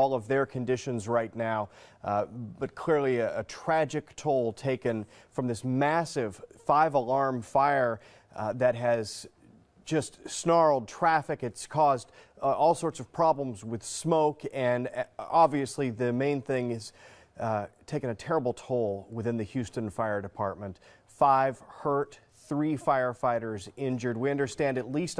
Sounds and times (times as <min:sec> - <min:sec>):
Speech: 0:00.0 - 0:25.2.